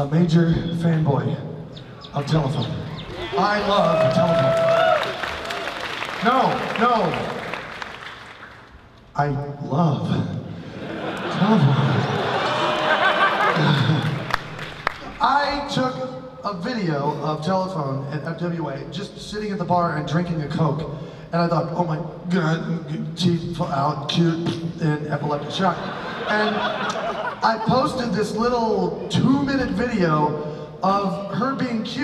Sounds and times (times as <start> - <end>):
Speech: 0.0 - 1.5, 2.1 - 4.5, 6.2 - 7.3, 9.2 - 10.4, 11.3 - 12.2, 15.2 - 26.6, 27.4 - 32.0.